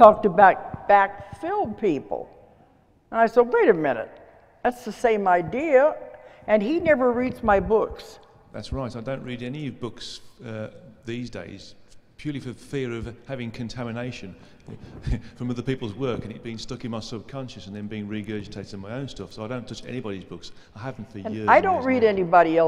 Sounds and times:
Speech: 8.6s - 14.4s, 15.1s - 22.6s.

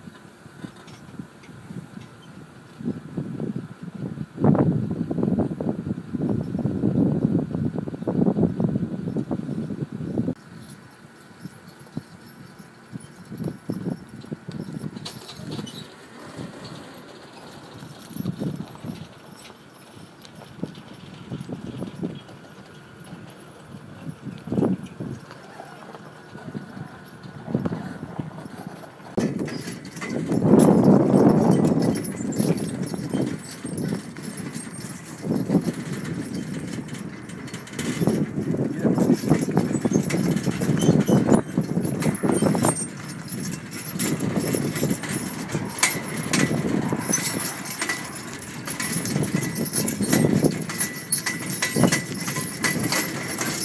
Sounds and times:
Clip-clop: 0.0s - 4.0s, 9.1s - 53.6s.

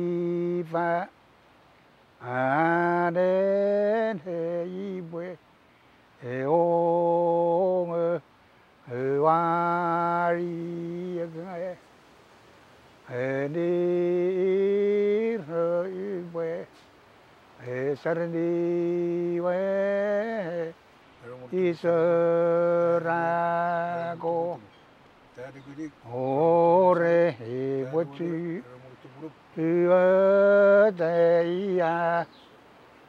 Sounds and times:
Speech: 25.4s - 26.0s.

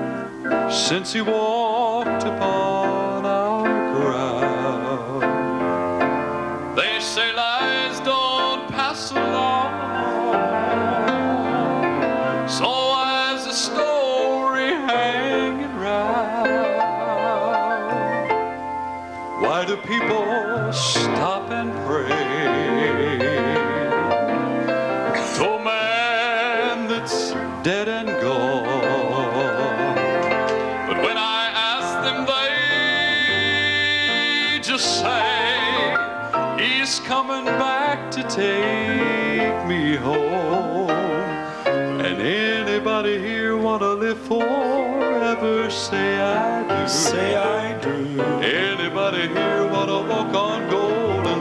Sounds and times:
Music: 0.0s - 51.4s
Male singing: 0.7s - 5.4s, 6.8s - 18.0s, 19.4s - 23.9s, 25.2s - 30.2s, 30.9s - 51.4s.

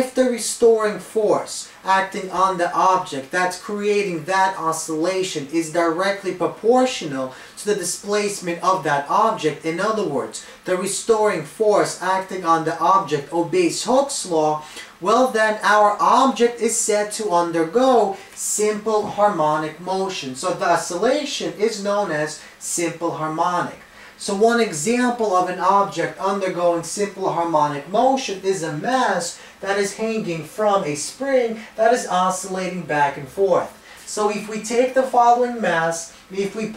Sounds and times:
Speech: 0.0s - 36.7s.

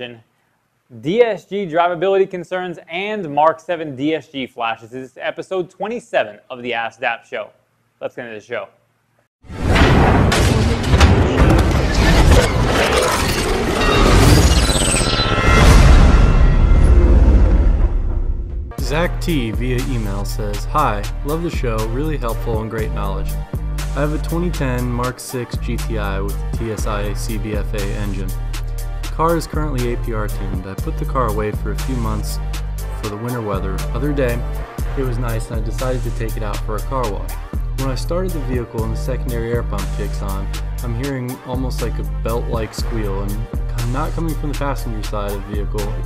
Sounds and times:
Speech: 0.0s - 0.3s, 0.9s - 8.8s, 18.8s - 23.4s, 24.0s - 28.4s, 29.2s - 32.4s, 33.0s - 46.0s
Music: 9.7s - 46.0s.

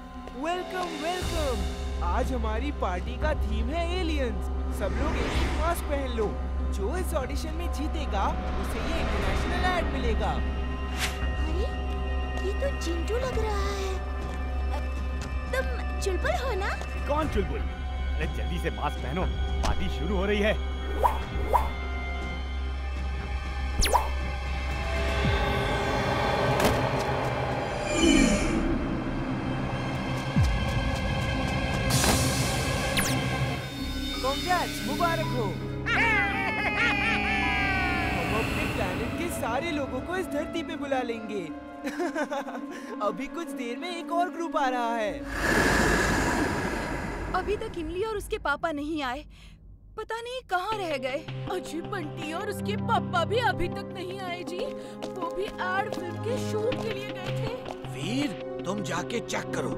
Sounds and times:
Music: 0.0s - 59.7s.

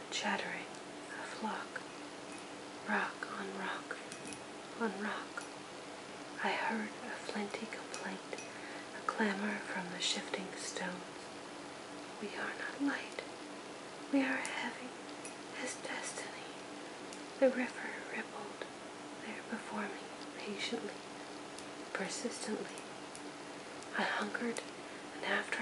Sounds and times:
Speech: 4.8s - 5.4s, 12.2s - 13.2s, 17.4s - 21.0s, 21.9s - 22.8s, 23.9s - 24.6s, 25.2s - 25.6s.

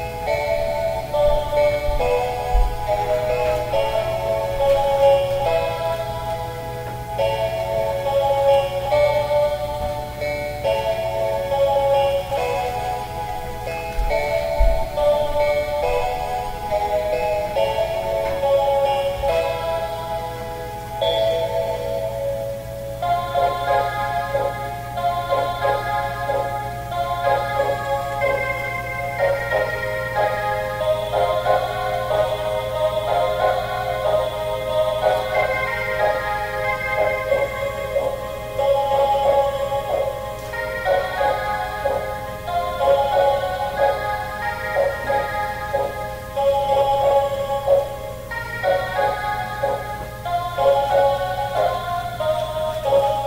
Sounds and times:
Music: 0.0s - 53.2s.

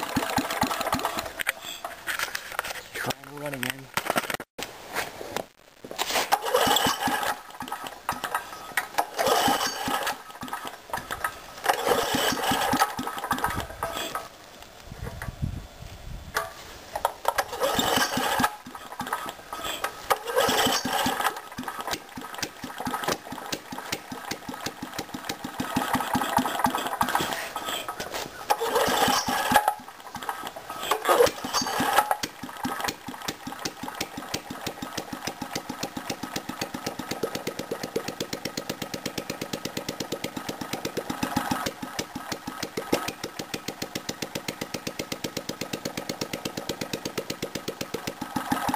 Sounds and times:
Engine starting: 0.0s - 2.0s, 6.2s - 14.3s, 16.4s - 48.7s
Speech: 2.8s - 3.9s.

